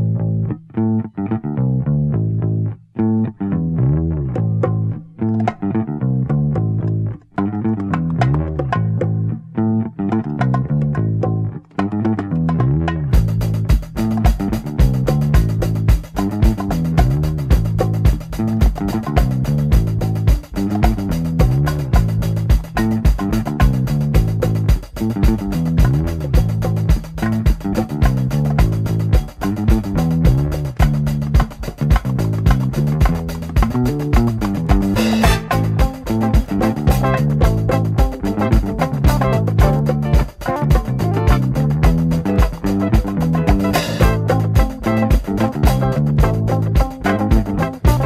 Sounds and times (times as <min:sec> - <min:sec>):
Music: 0:00.0 - 0:48.0.